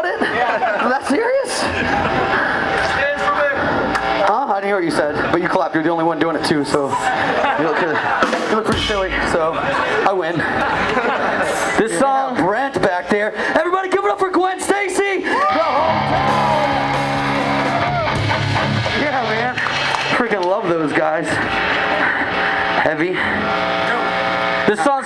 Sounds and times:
Speech: 4.2 - 10.5, 11.8 - 15.2, 24.7 - 25.0
Music: 8.2 - 9.3, 15.7 - 20.6.

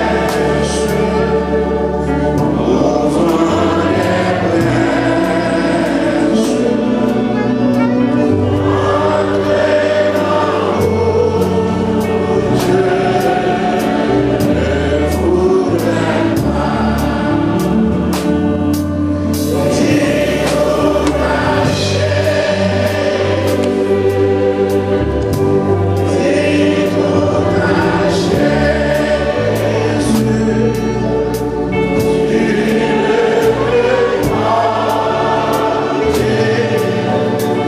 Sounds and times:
Music: 0.0 - 37.6.

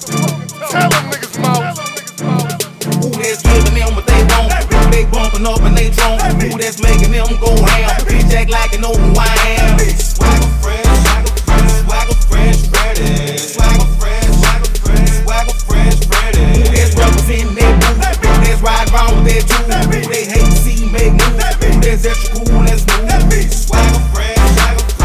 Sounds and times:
Music: 0.0 - 25.0.

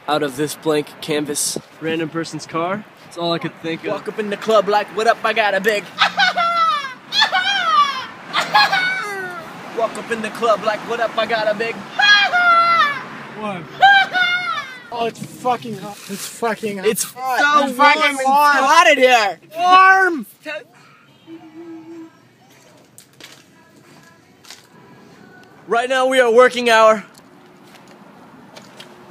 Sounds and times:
Outside, urban or manmade: 0.0 - 29.1
Screaming: 6.1 - 9.4, 11.9 - 13.0, 13.8 - 14.9.

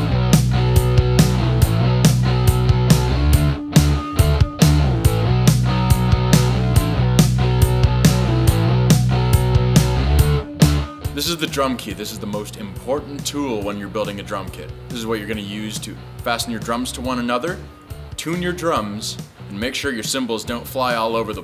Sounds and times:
Grunge: 0.0 - 19.6
Drum kit: 0.0 - 21.4.

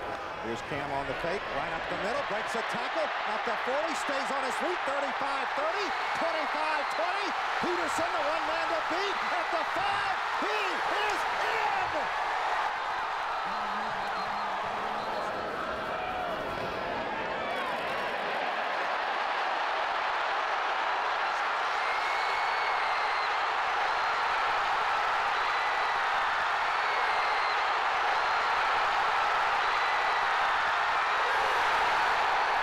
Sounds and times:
Speech: 0.4 - 12.1
Run: 2.5 - 32.6.

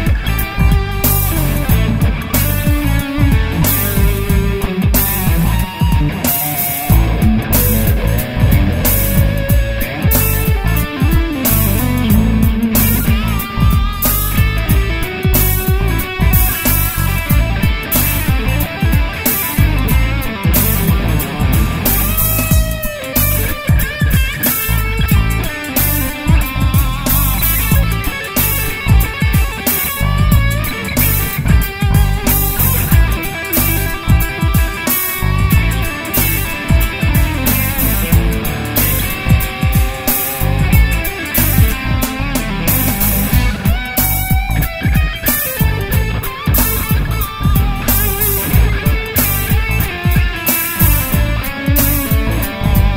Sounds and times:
Electric guitar: 0.0 - 52.9
Strum: 0.0 - 52.9.

